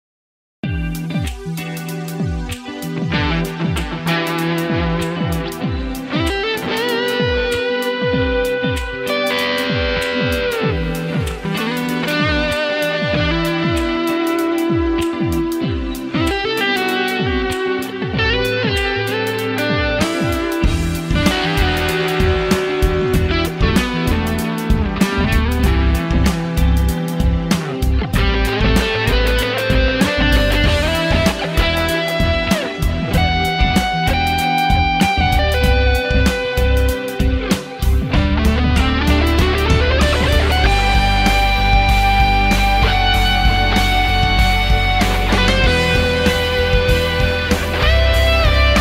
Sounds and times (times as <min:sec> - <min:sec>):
Bass guitar: 0:00.6 - 0:48.8
Strum: 0:19.8 - 0:48.8.